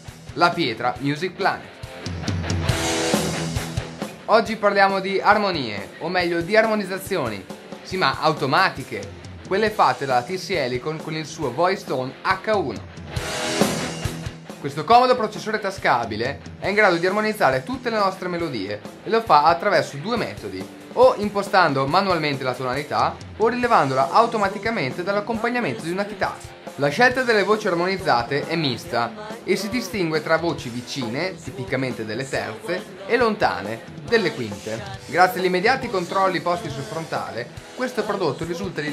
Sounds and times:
Soundtrack music: 0.0 - 38.9
Speech: 0.4 - 1.8, 4.3 - 12.8, 14.6 - 38.9.

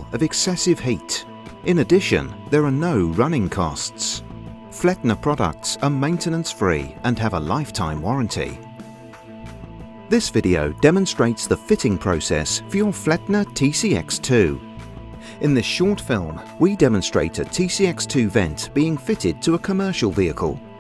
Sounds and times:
Speech: 0.0 - 4.2, 4.8 - 8.6, 10.1 - 14.6, 15.4 - 20.6
Music: 0.0 - 20.8.

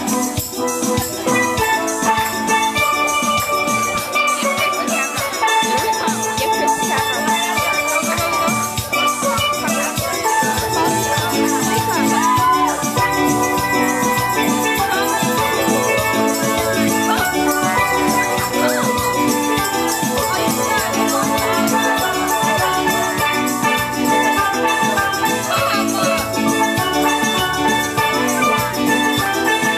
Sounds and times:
Speech: 0.0 - 29.0
Steelpan: 0.0 - 29.7.

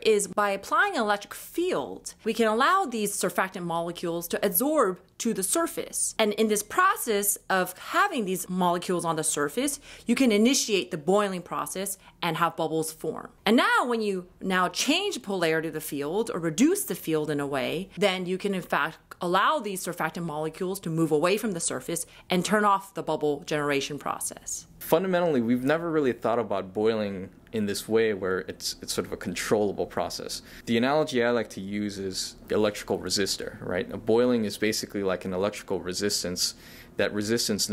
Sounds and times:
Speech: 0.0 - 37.7.

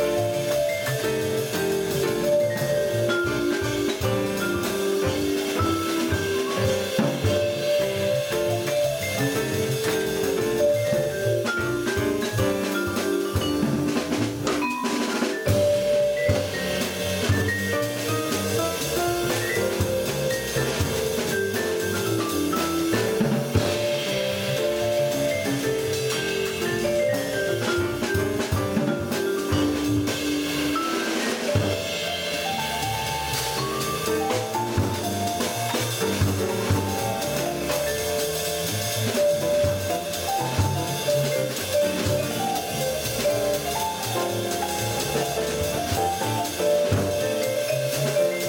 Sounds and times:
Drum: 0.0 - 48.4
Vibraphone: 0.0 - 48.4.

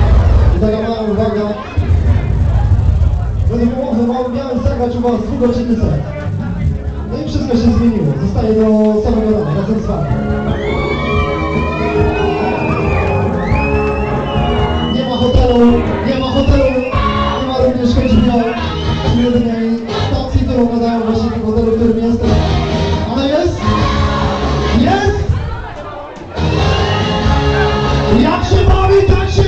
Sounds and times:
Music: 0.0 - 29.4
Speech: 0.5 - 1.9, 3.5 - 10.1, 15.0 - 22.3, 28.1 - 29.4.

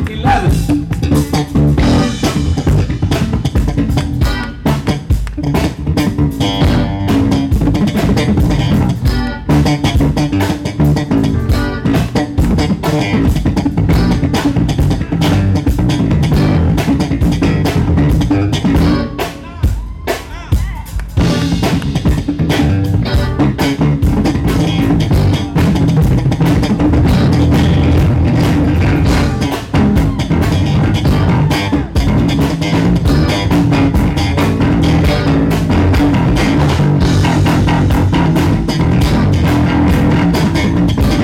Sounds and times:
Jazz: 0.0 - 19.4, 21.0 - 41.2
Bass drum: 0.0 - 41.2
Bass guitar: 0.0 - 41.2
Drum kit: 0.0 - 41.2.

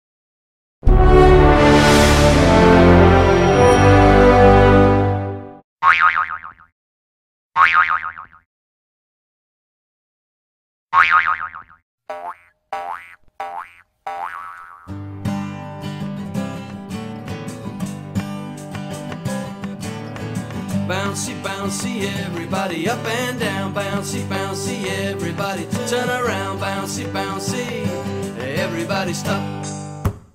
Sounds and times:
Music: 0.8 - 5.6, 14.9 - 30.2
Boing: 5.8 - 6.7, 7.6 - 8.5, 11.0 - 14.9.

